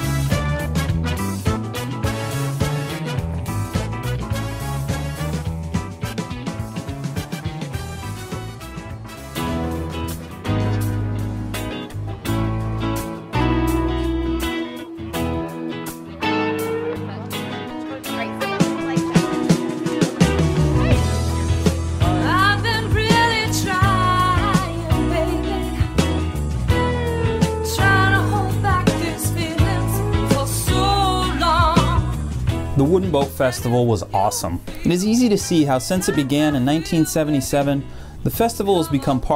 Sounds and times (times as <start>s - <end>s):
Music: 0.0s - 39.3s.